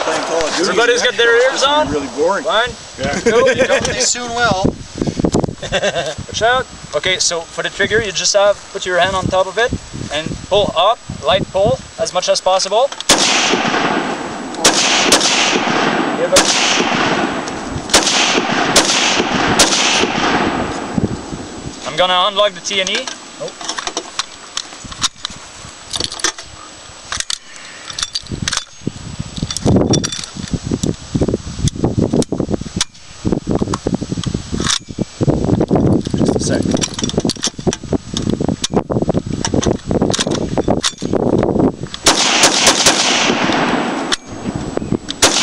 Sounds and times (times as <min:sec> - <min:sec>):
Gunshot, gunfire: 0:13.1 - 0:20.7, 0:42.1 - 0:44.0.